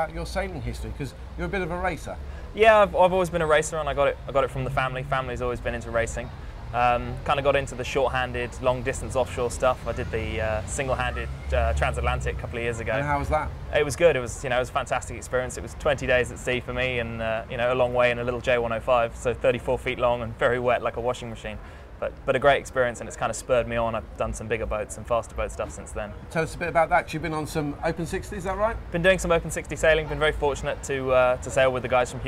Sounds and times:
Speech: 0:00.0 - 0:32.2.

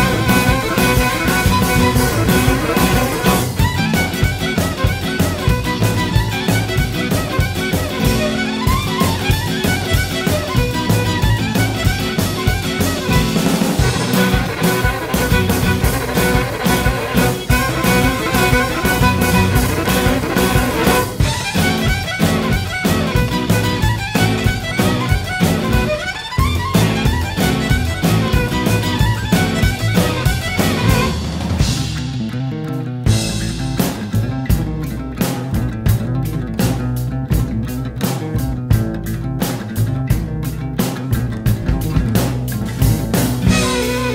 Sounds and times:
Violin, fiddle: 0:00.0 - 0:31.3, 0:43.5 - 0:44.1.

